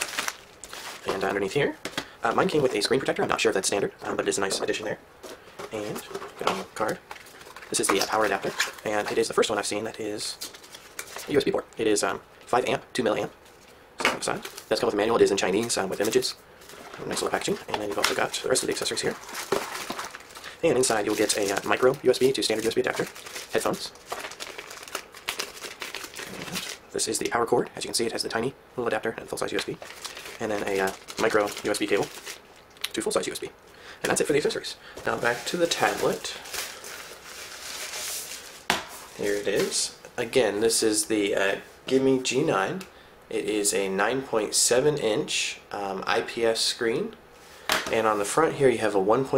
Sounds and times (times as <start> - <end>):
Speech: 1.0 - 5.0, 5.7 - 7.0, 7.7 - 10.4, 11.3 - 13.4, 14.1 - 16.4, 17.0 - 19.2, 20.6 - 24.0, 26.9 - 29.8, 30.4 - 32.1, 32.9 - 36.4, 39.2 - 47.2, 47.9 - 49.3.